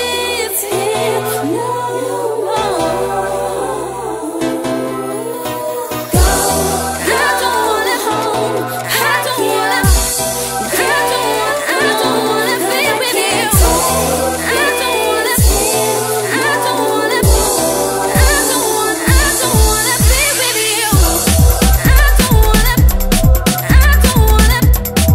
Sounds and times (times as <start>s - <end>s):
Music: 0.0s - 25.1s.